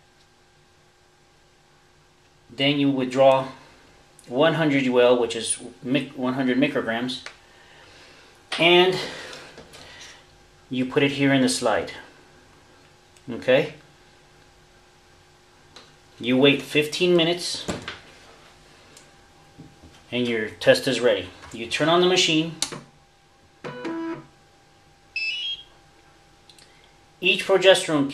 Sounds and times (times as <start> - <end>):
Inside, small room: 0.0 - 28.1
Speech: 2.5 - 3.6, 4.3 - 7.3, 8.5 - 9.2, 10.7 - 12.1, 13.2 - 13.8, 16.2 - 17.8, 20.1 - 22.6, 27.2 - 28.1.